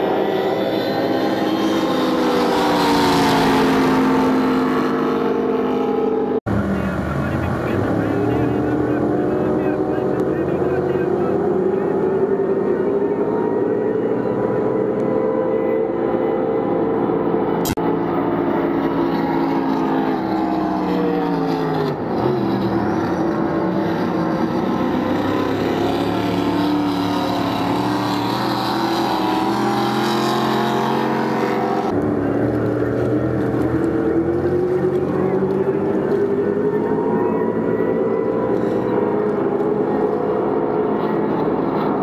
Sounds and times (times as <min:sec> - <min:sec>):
Motorboat, speedboat: 0:00.0 - 0:42.0
Speech: 0:06.6 - 0:12.0.